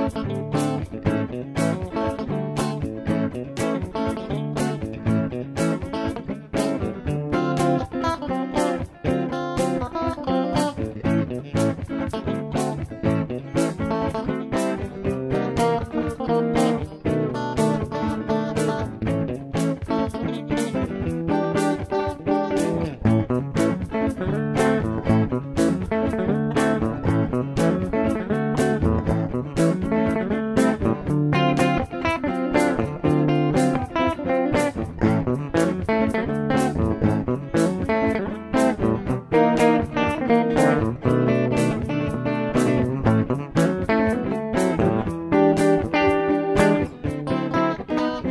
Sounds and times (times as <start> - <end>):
Bass guitar: 0.0 - 48.3.